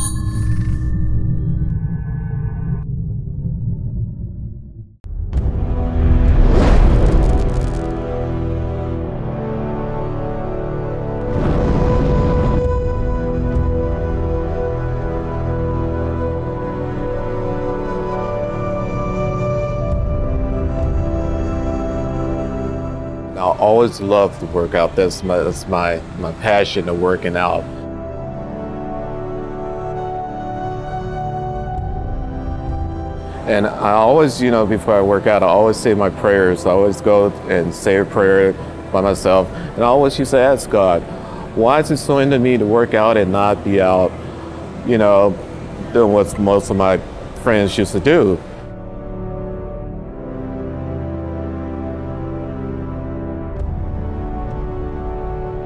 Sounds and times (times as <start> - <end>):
Music: 0.0 - 1.8, 5.0 - 55.6
Speech: 23.4 - 27.7, 33.5 - 41.0, 41.6 - 44.1, 44.8 - 48.4.